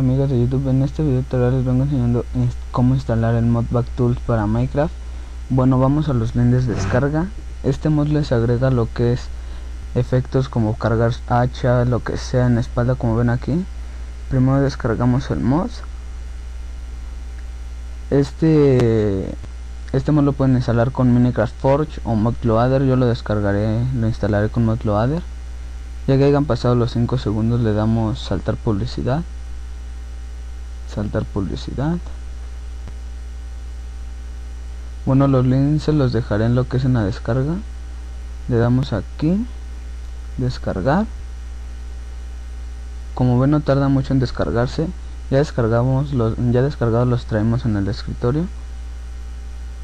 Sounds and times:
Speech: 0.0 - 4.9, 5.5 - 13.7, 14.3 - 15.9, 18.1 - 25.3, 26.0 - 29.3, 30.9 - 32.2, 35.0 - 37.7, 38.5 - 39.6, 40.4 - 41.2, 43.2 - 48.6.

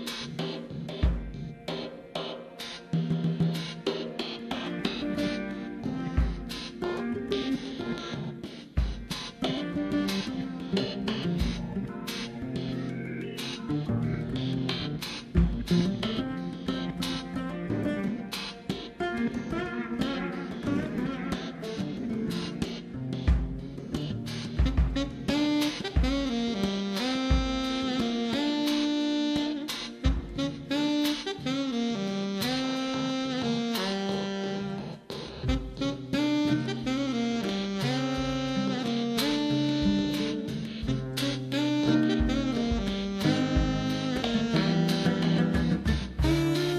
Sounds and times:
Jazz: 0.0 - 46.7
Saxophone: 0.0 - 46.7.

